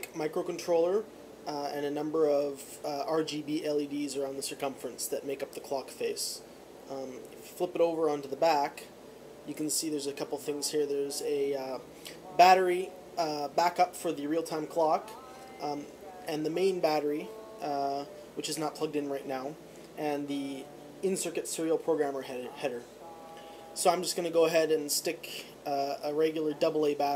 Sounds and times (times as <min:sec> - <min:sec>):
Speech: 0:00.0 - 0:08.9, 0:09.5 - 0:22.9, 0:23.8 - 0:27.1
Music: 0:00.0 - 0:27.1.